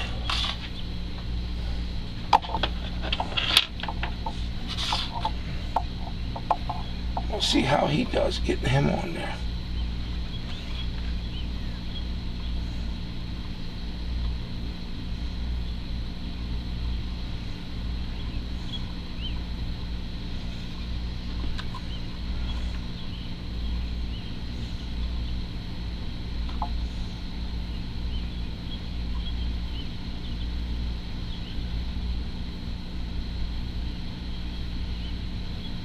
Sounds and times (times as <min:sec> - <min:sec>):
Speech: 0:07.3 - 0:09.4.